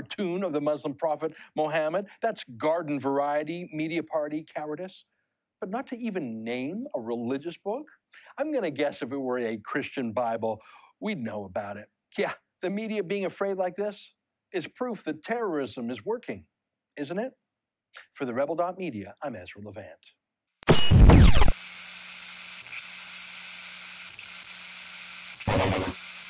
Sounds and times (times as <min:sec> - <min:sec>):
Speech: 0:00.0 - 0:17.4, 0:18.0 - 0:20.2.